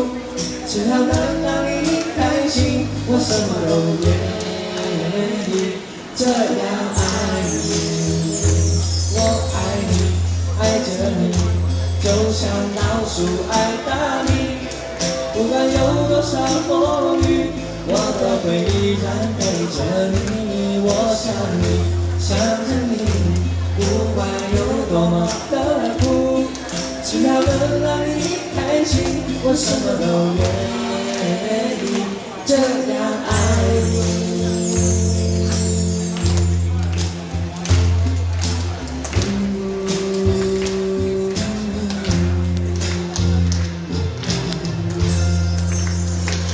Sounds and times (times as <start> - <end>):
Inside, large room or hall: 0.0 - 46.5
Music: 0.0 - 46.5
Singing: 0.0 - 46.5.